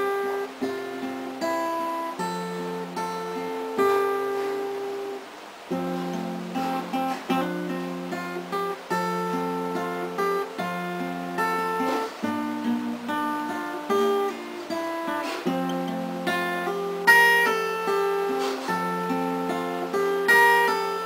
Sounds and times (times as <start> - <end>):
Acoustic guitar: 0.0 - 21.0
Strum: 0.0 - 21.0.